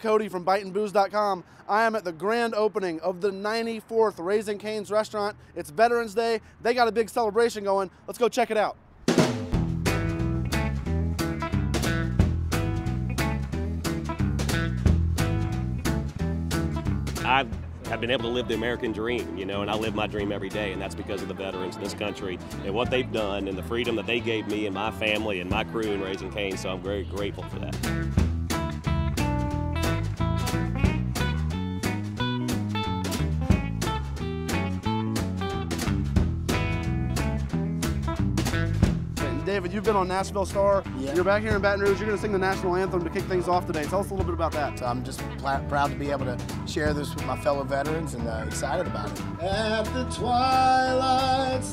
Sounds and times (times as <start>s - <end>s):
Music: 9.1s - 51.7s.